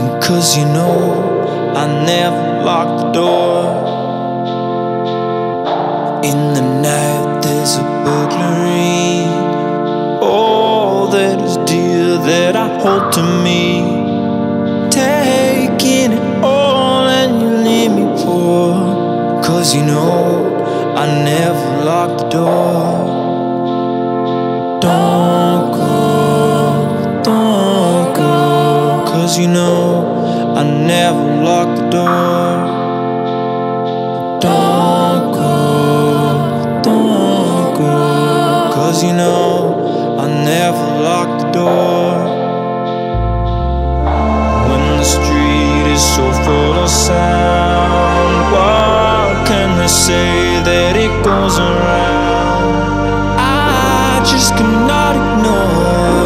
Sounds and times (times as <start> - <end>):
Music: 0.0 - 56.2.